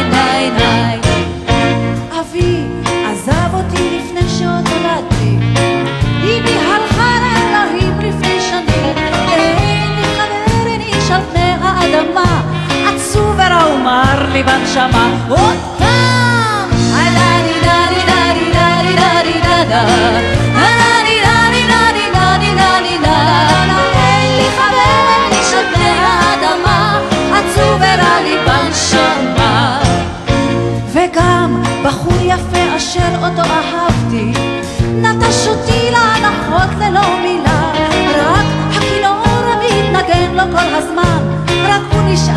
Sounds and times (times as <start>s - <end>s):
Musical instrument: 0.0s - 42.3s.